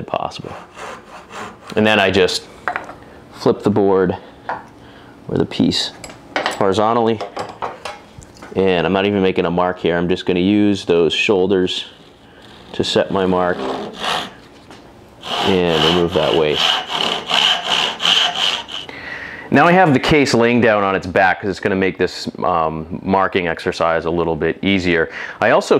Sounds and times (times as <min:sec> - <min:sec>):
Speech: 0:00.0 - 0:00.6, 0:01.7 - 0:02.5, 0:03.4 - 0:04.2, 0:05.3 - 0:06.0, 0:06.6 - 0:07.2, 0:08.5 - 0:12.0, 0:12.7 - 0:13.9, 0:15.4 - 0:16.7, 0:19.5 - 0:25.7.